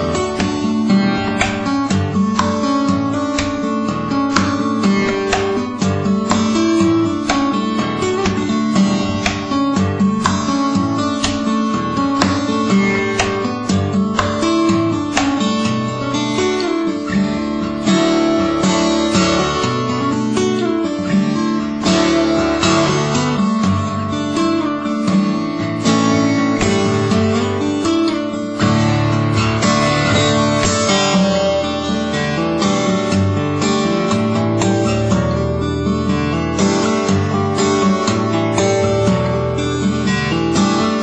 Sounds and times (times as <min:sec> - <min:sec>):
Strum: 0:00.0 - 0:41.0.